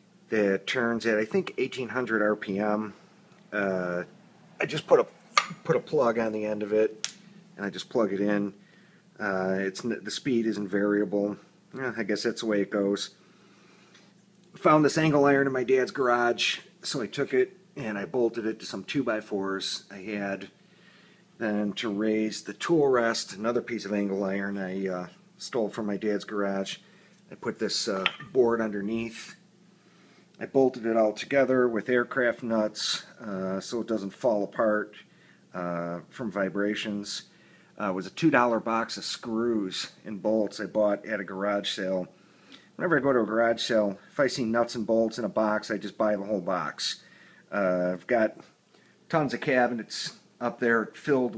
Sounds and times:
Speech: 0:00.3 - 0:07.0, 0:07.6 - 0:08.6, 0:09.2 - 0:13.2, 0:14.6 - 0:20.6, 0:21.4 - 0:29.4, 0:30.4 - 0:42.2, 0:42.8 - 0:51.3.

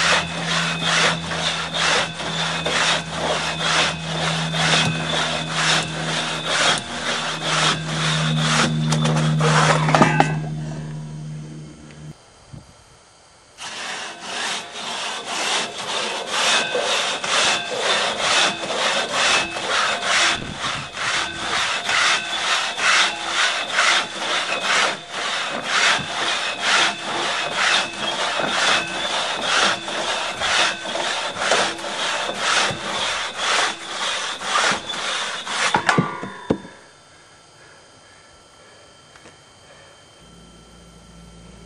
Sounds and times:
Sawing: 0:00.0 - 0:12.2, 0:13.6 - 0:36.9
Rub: 0:13.6 - 0:20.3, 0:21.0 - 0:35.8
Wood: 0:13.6 - 0:36.8.

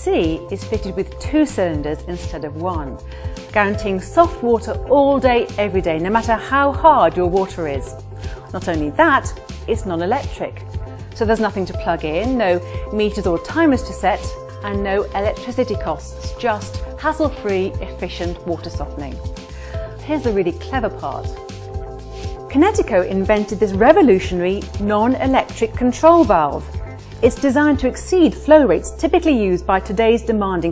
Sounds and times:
Speech: 0:00.0 - 0:07.9, 0:08.5 - 0:10.6, 0:11.2 - 0:19.2, 0:20.0 - 0:21.4, 0:22.5 - 0:30.7.

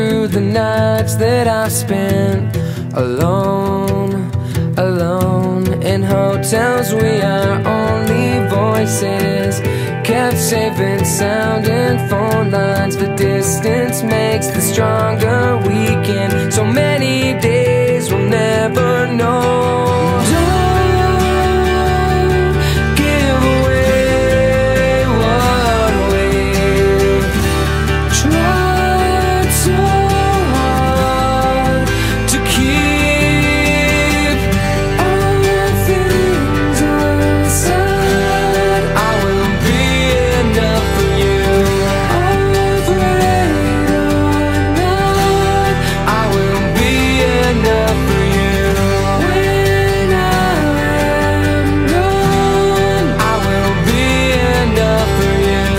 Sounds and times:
Music: 0:00.0 - 0:55.7.

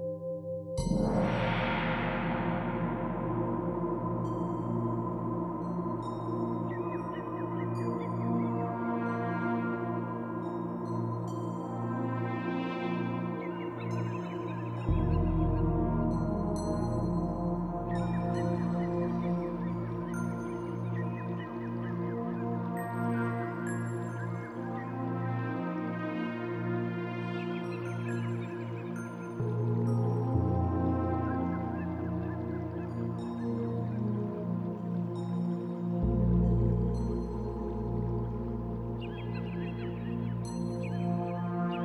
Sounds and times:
Music: 0:00.0 - 0:41.8.

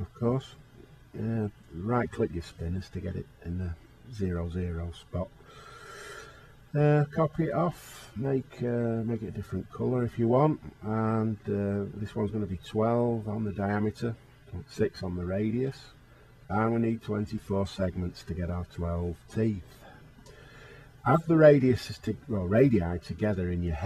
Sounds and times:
Speech: 0:00.0 - 0:05.3, 0:06.7 - 0:19.8, 0:21.0 - 0:23.8.

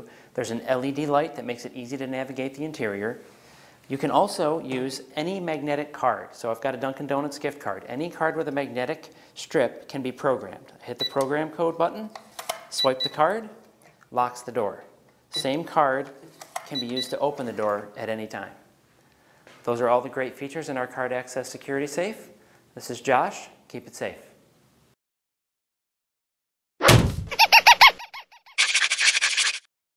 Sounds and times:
Whack, thwack: 0:26.8 - 0:27.4.

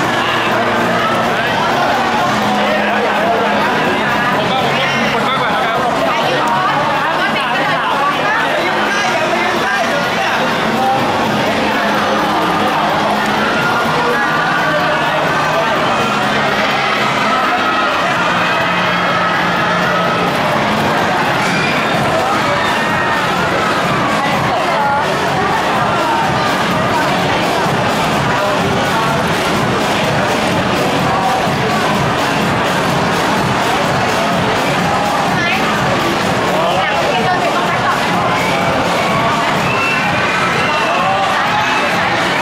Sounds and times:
Music: 0:00.0 - 0:42.4
Speech: 0:00.0 - 0:42.4.

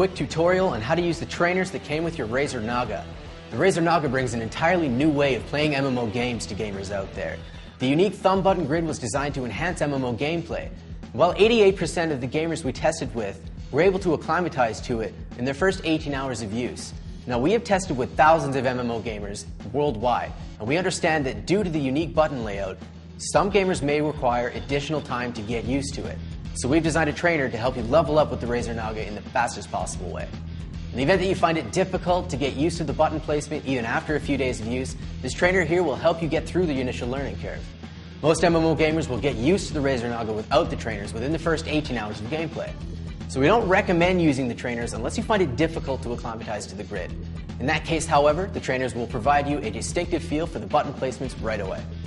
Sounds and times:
Speech: 0:00.0 - 0:30.3, 0:30.9 - 0:51.9
Music: 0:00.0 - 0:52.0.

